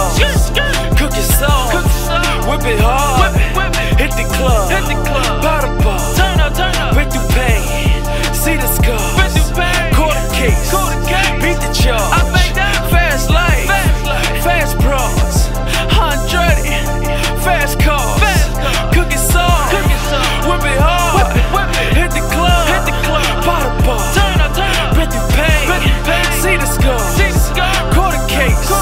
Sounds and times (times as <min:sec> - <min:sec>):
Pop music: 0:00.0 - 0:28.8.